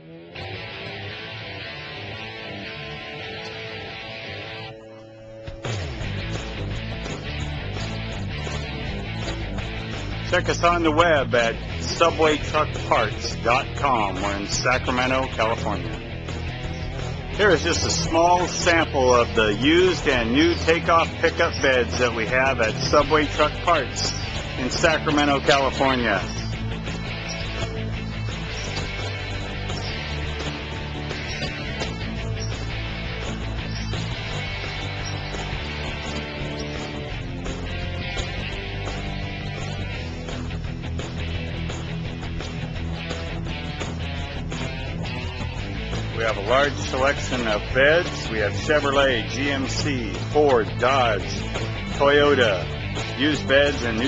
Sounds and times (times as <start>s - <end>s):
Music: 0.0s - 54.0s.